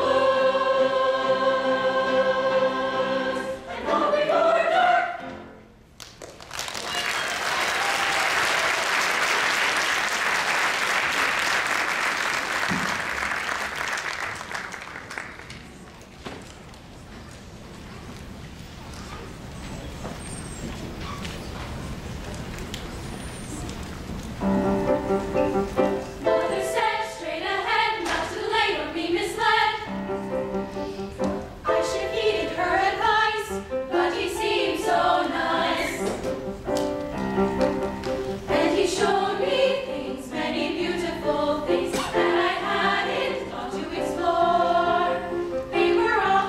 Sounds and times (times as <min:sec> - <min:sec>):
Applause: 0:06.0 - 0:15.9.